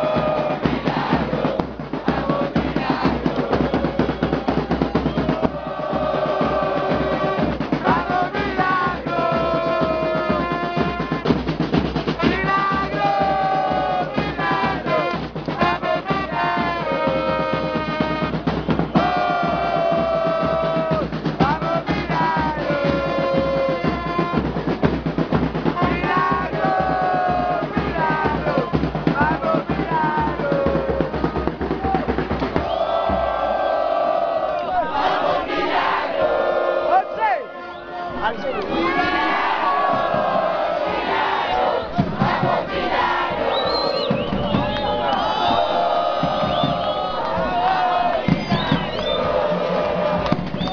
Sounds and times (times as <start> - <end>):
Music: 0.0 - 36.2, 38.2 - 50.7
Crowd: 0.0 - 50.7
Outside, urban or manmade: 0.0 - 50.7.